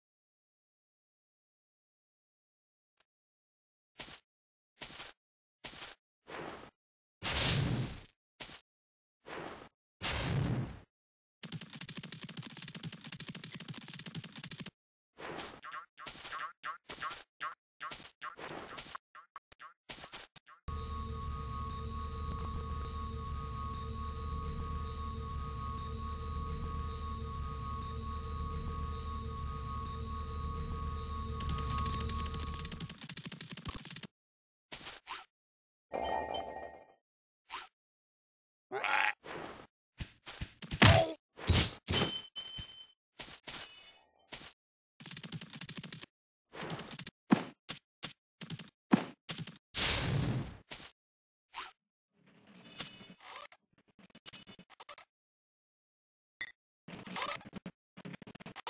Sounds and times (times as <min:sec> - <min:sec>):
Sound effect: 0:04.8 - 0:08.6, 0:09.3 - 0:34.1, 0:38.9 - 0:55.1, 0:56.4 - 0:58.6.